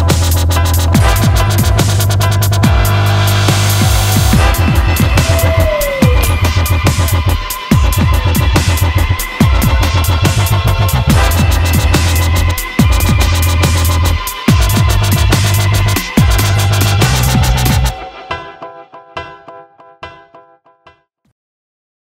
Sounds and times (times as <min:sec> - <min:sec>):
Drum and bass: 0:00.0 - 0:18.0.